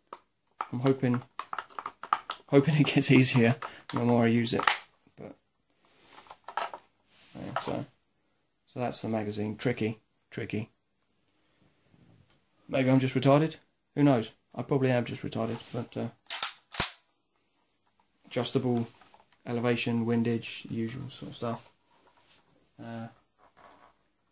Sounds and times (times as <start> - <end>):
Inside, small room: 0.0 - 24.3
Speech: 0.7 - 1.3, 2.5 - 5.4, 7.4 - 8.0, 8.7 - 10.8, 12.7 - 16.2, 18.3 - 21.7, 22.8 - 23.2.